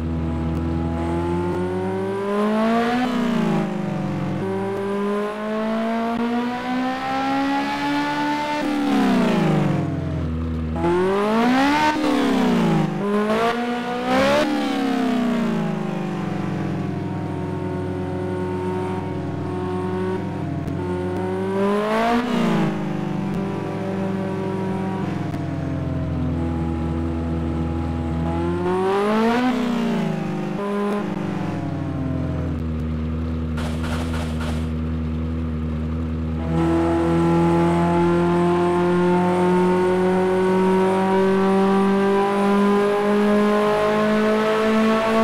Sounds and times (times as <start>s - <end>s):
Heavy engine (low frequency): 0.0s - 45.2s
Vehicle: 0.0s - 45.2s
Accelerating, revving, vroom: 0.5s - 9.9s, 10.8s - 17.0s, 17.7s - 25.4s, 26.4s - 32.3s, 36.3s - 45.2s.